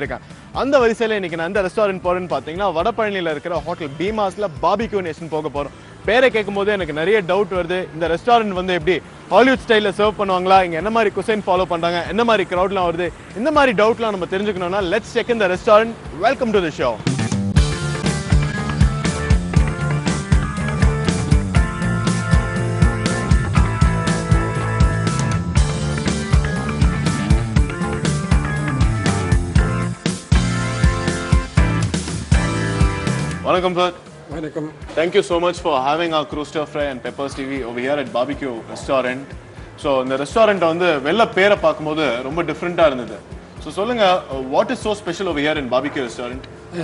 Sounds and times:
Speech: 0:00.0 - 0:17.0, 0:33.4 - 0:39.2, 0:39.8 - 0:46.8
Music: 0:00.0 - 0:46.8.

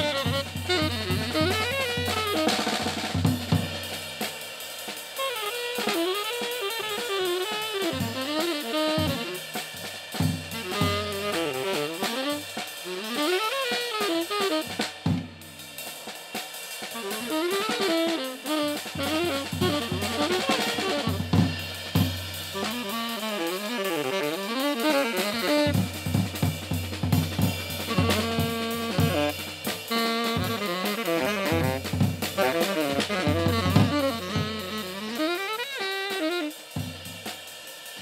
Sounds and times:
Drum: 0:00.0 - 0:38.0
Drum kit: 0:00.0 - 0:38.0.

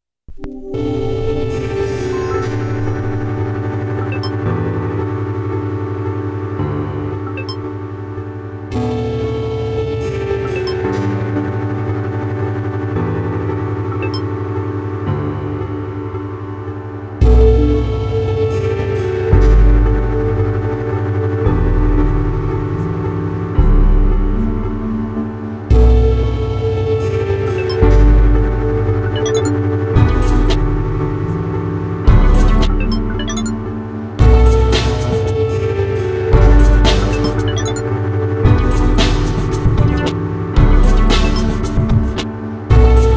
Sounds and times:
Music: 0:00.3 - 0:43.1.

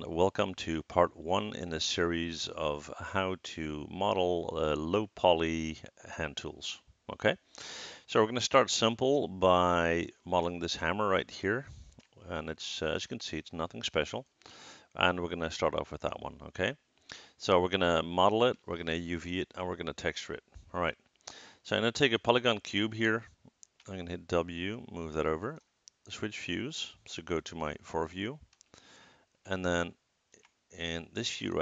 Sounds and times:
Speech: 0:00.0 - 0:07.4, 0:08.1 - 0:14.3, 0:14.9 - 0:16.8, 0:17.4 - 0:21.0, 0:21.6 - 0:23.3, 0:23.9 - 0:28.4, 0:29.5 - 0:30.0, 0:30.8 - 0:31.6.

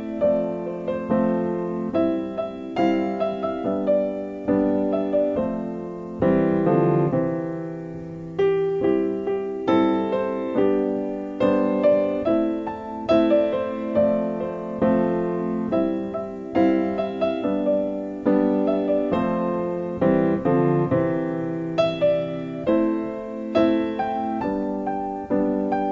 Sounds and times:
Music: 0:00.0 - 0:25.9.

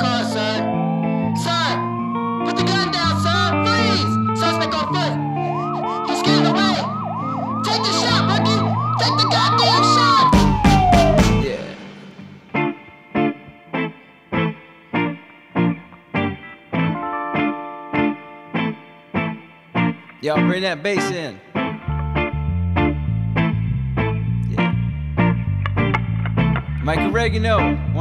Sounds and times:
Background music: 0:00.0 - 0:28.0
Independent music: 0:00.0 - 0:28.0.

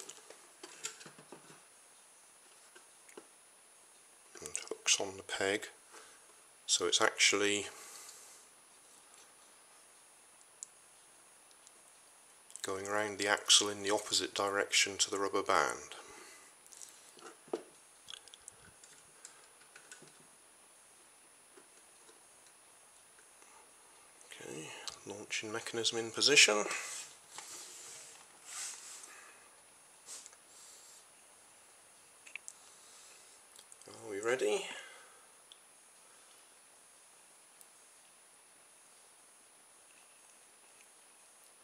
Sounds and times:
Inside, small room: 0:00.0 - 0:41.6
Speech: 0:04.4 - 0:05.8, 0:06.7 - 0:07.8, 0:12.6 - 0:16.1, 0:24.3 - 0:27.0, 0:33.8 - 0:35.0.

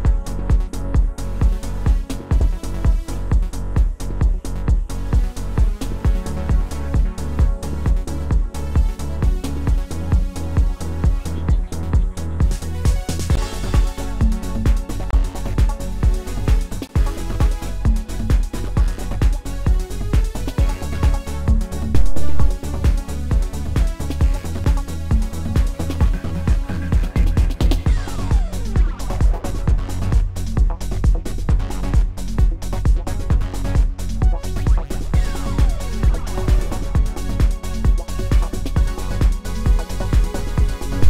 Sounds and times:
Music: 0:00.0 - 0:41.0.

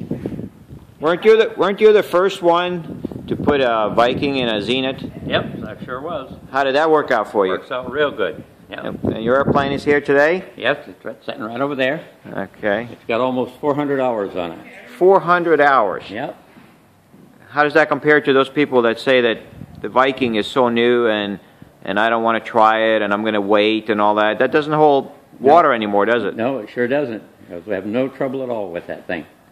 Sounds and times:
Speech: 0:01.0 - 0:16.4, 0:17.5 - 0:29.4.

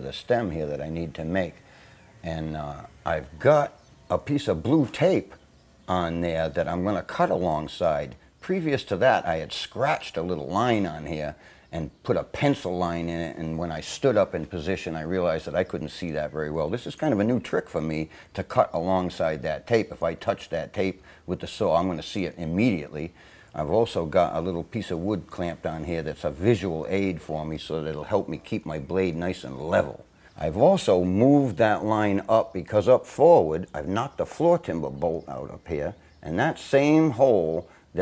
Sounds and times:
Speech: 0:00.0 - 0:01.6, 0:02.2 - 0:38.0.

